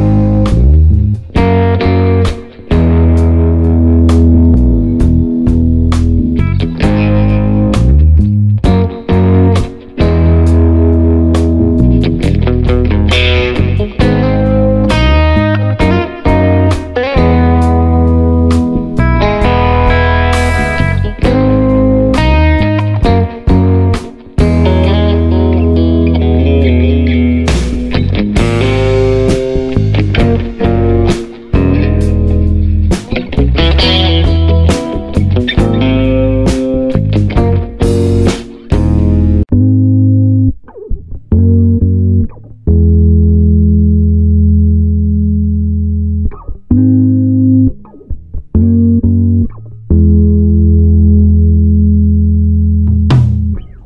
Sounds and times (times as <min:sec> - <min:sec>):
Music: 0:00.0 - 0:53.8.